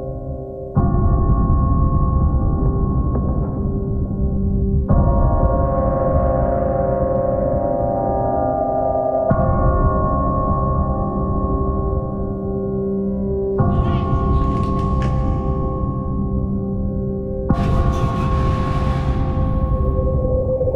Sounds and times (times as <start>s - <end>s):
Music: 0.0s - 20.7s.